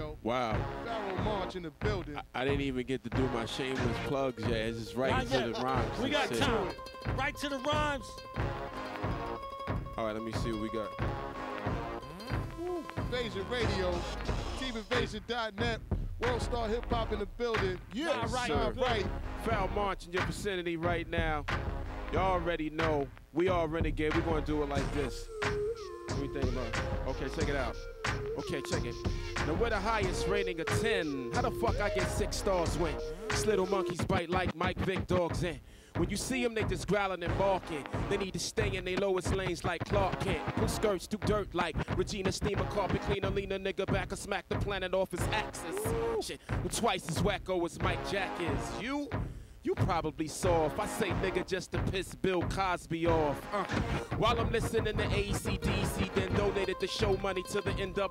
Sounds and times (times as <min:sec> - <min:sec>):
Speech: 0:00.0 - 0:08.2, 0:10.0 - 0:11.0, 0:12.2 - 0:21.5, 0:22.1 - 0:25.2, 0:26.1 - 0:27.8, 0:28.4 - 0:58.1
Music: 0:00.0 - 0:58.1.